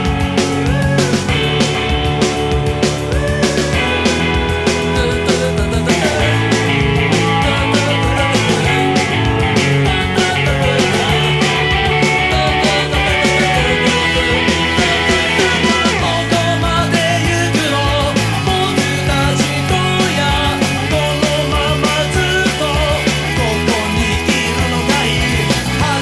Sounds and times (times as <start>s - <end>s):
Progressive rock: 0.0s - 26.0s.